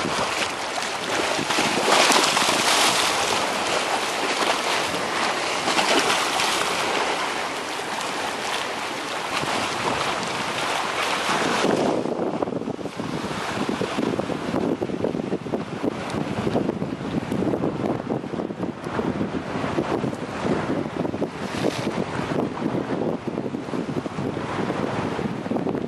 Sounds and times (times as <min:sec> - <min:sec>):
Ocean: 0:00.0 - 0:25.8.